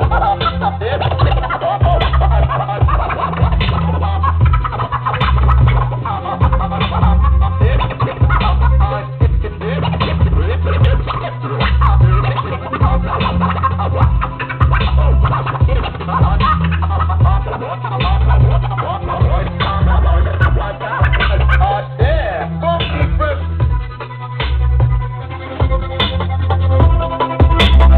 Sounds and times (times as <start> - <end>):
Scratching (performance technique): 0.0 - 27.9.